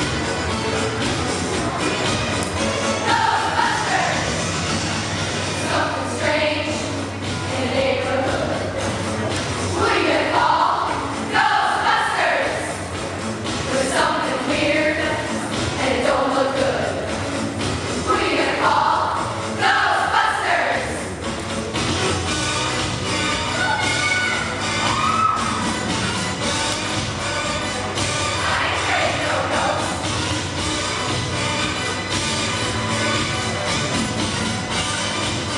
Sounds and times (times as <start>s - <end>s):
Choir: 2.8s - 4.4s, 5.5s - 9.0s, 9.7s - 12.8s, 13.5s - 17.2s, 18.0s - 21.1s, 28.0s - 30.1s.